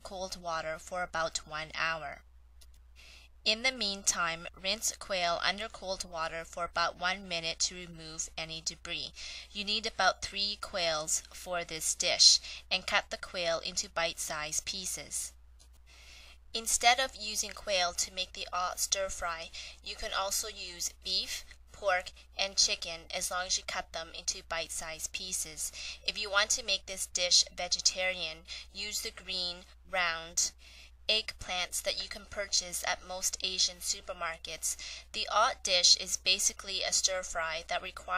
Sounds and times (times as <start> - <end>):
Speech: 0.0 - 2.2, 3.5 - 15.3, 16.6 - 38.1.